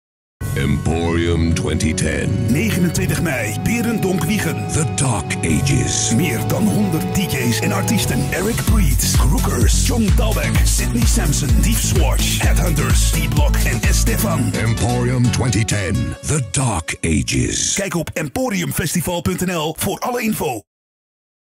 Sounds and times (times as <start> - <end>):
Music: 0.4 - 19.6
Speech: 0.5 - 20.7.